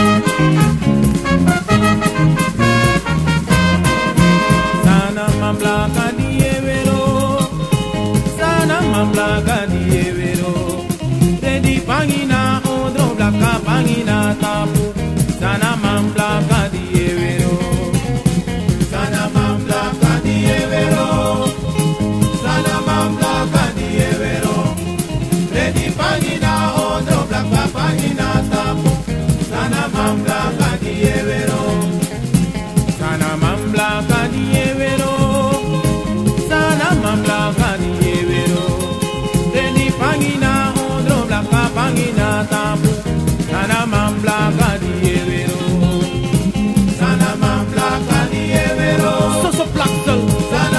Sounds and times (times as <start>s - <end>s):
Music: 0.0s - 50.7s.